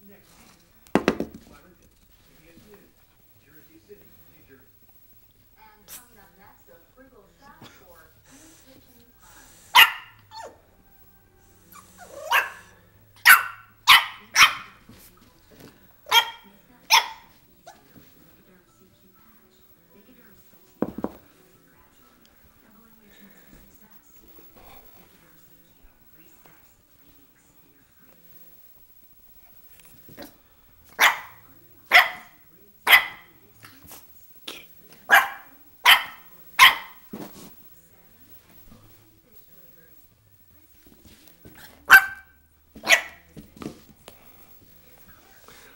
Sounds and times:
Inside, small room: 0.0 - 45.7
Speech: 5.5 - 9.9, 14.0 - 28.6, 31.0 - 42.2, 44.5 - 45.7
Bark: 9.7 - 10.6, 12.0 - 14.8, 16.1 - 17.3, 31.0 - 33.3, 35.1 - 37.1, 41.9 - 43.2
Yip: 9.8 - 10.6, 11.7 - 14.8, 16.1 - 17.3, 31.0 - 33.3, 35.1 - 37.0, 41.9 - 43.2.

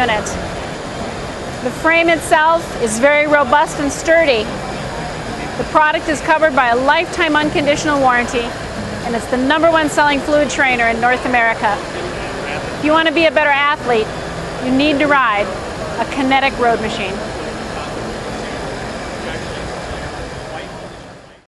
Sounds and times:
Speech: 0.0 - 0.5, 1.6 - 8.5, 9.1 - 21.4.

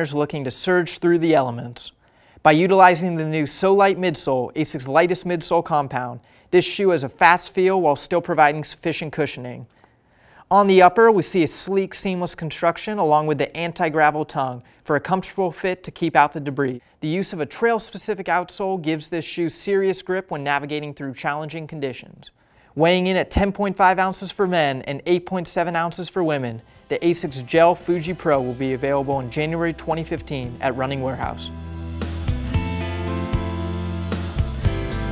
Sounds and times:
Speech: 0.0 - 9.7, 10.5 - 31.5.

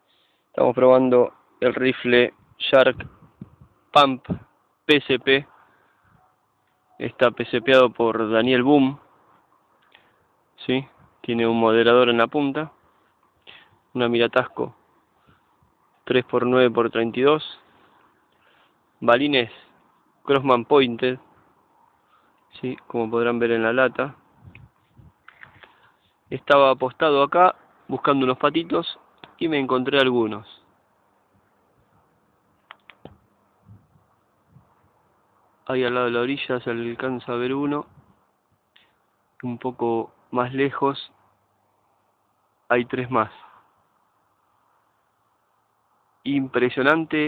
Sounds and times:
Speech: 0.6 - 3.1, 4.0 - 5.5, 7.0 - 9.0, 10.6 - 12.8, 14.0 - 14.8, 16.1 - 17.6, 19.0 - 19.7, 20.3 - 21.2, 22.5 - 24.2, 26.3 - 30.7, 35.7 - 37.9, 39.4 - 41.1, 42.7 - 43.5, 46.3 - 47.2.

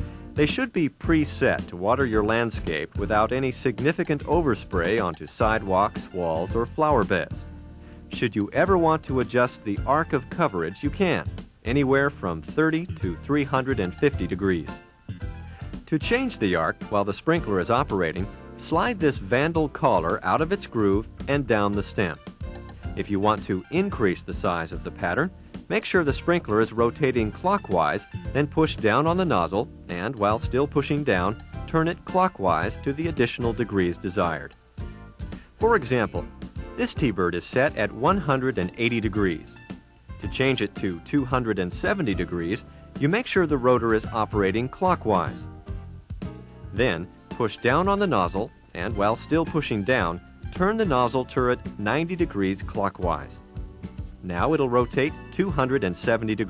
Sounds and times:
Music: 0.0 - 56.4
Speech: 0.4 - 7.4, 8.1 - 14.8, 15.9 - 22.3, 23.0 - 34.6, 35.6 - 39.6, 40.2 - 45.5, 46.8 - 53.4, 54.2 - 56.4.

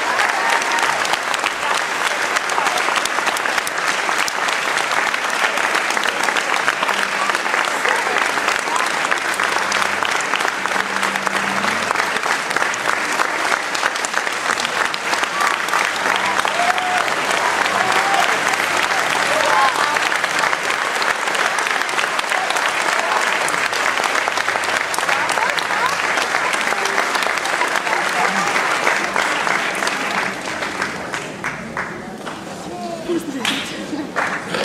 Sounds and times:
Applause: 0.0 - 34.6
Speech: 6.2 - 9.8, 25.0 - 34.6.

